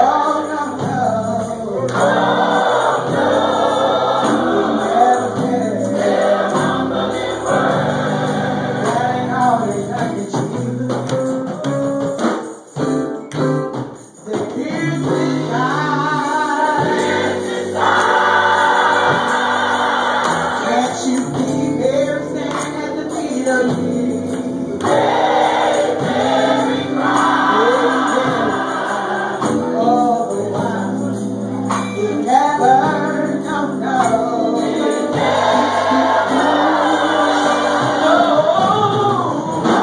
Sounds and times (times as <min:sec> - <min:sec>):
Choir: 0:01.9 - 0:09.7, 0:15.2 - 0:23.6, 0:24.7 - 0:31.4, 0:32.9 - 0:39.8.